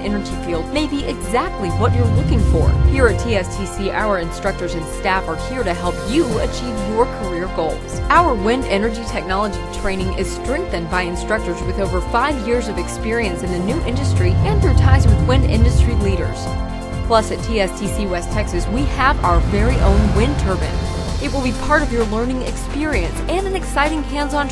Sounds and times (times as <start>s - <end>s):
Speech: 0.0s - 16.5s, 17.1s - 24.5s
Music: 0.0s - 24.5s.